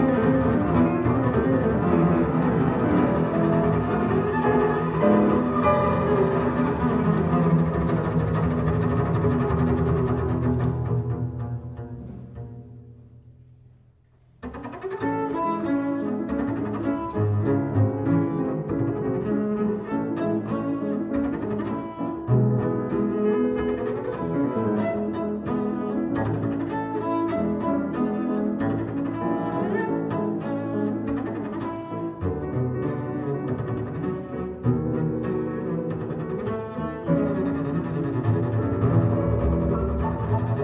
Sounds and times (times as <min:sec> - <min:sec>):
Violin, fiddle: 0:00.0 - 0:11.5, 0:14.4 - 0:40.6
Cello: 0:00.0 - 0:40.6
Classical music: 0:00.0 - 0:40.6
Double bass: 0:00.0 - 0:40.6.